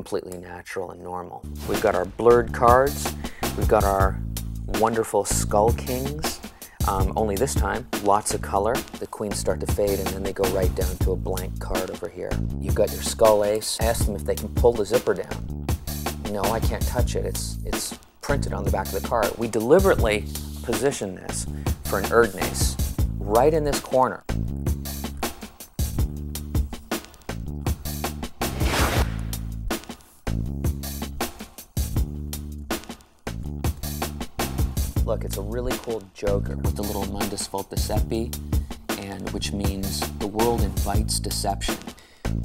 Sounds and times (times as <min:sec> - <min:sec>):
Speech: 0:00.0 - 0:15.4, 0:16.2 - 0:24.3, 0:35.0 - 0:41.9
Music: 0:00.0 - 0:42.4.